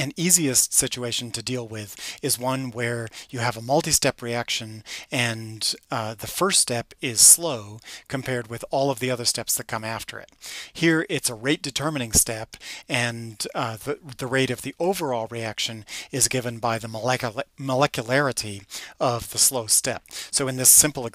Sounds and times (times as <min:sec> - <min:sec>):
Speech: 0:00.0 - 0:21.1.